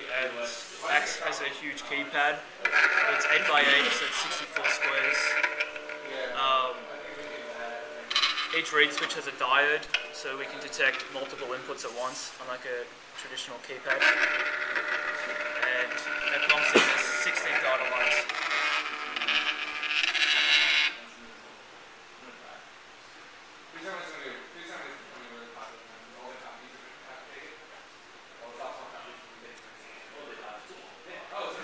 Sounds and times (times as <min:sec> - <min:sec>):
Speech: 0:00.0 - 0:05.4, 0:06.1 - 0:14.0, 0:15.6 - 0:18.3, 0:21.1 - 0:22.7, 0:23.7 - 0:31.6
Inside, small room: 0:00.0 - 0:31.6.